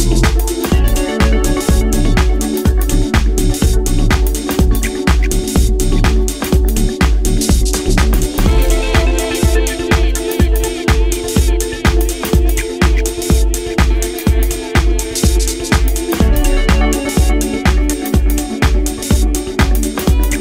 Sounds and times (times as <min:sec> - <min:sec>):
Disco: 0:00.0 - 0:20.4.